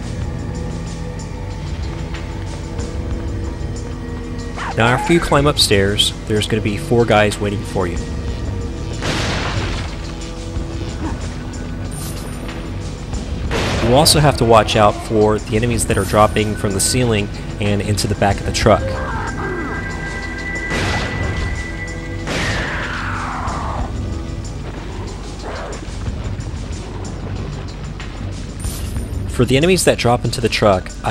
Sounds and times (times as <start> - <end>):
Music: 0.0 - 31.1
Speech: 4.7 - 8.1, 13.8 - 19.1, 29.3 - 31.1.